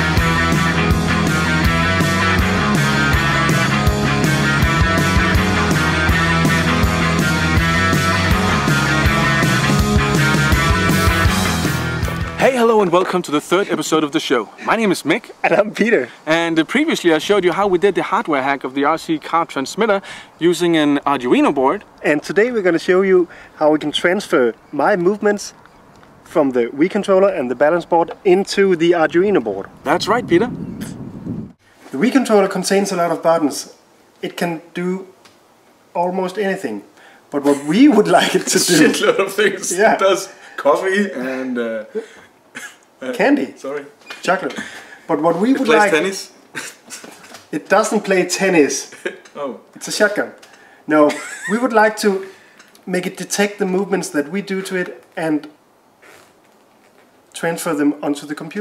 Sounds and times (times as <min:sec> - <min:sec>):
Speech: 0:12.4 - 0:25.6, 0:26.3 - 0:30.5, 0:31.9 - 0:35.1, 0:36.0 - 0:41.9, 0:43.0 - 0:46.4, 0:47.6 - 0:52.2, 0:52.9 - 0:55.6, 0:57.4 - 0:58.6.